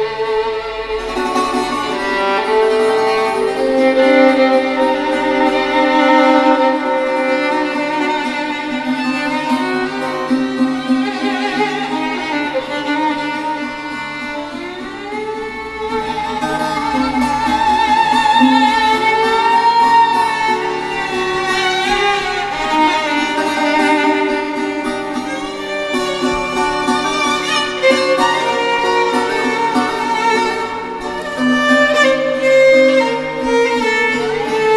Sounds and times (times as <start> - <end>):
Violin, fiddle: 0.0 - 34.7.